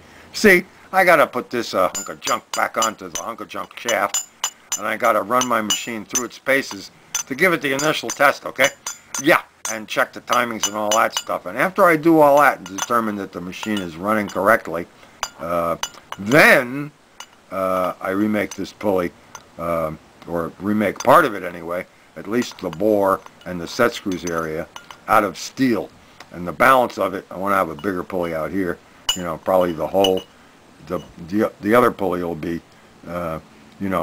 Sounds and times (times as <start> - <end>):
Speech: 0.3 - 4.2, 4.8 - 16.9, 17.5 - 30.2, 30.8 - 34.0.